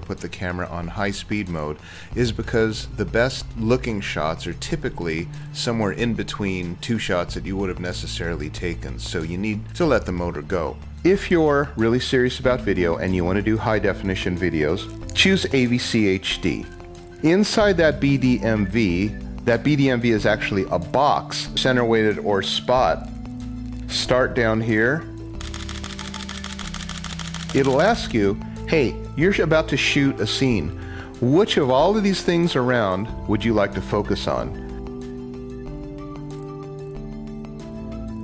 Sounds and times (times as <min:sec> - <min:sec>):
Speech: 0:00.0 - 0:16.7, 0:17.3 - 0:23.1, 0:23.9 - 0:25.1, 0:27.6 - 0:34.6
Music: 0:00.0 - 0:38.2.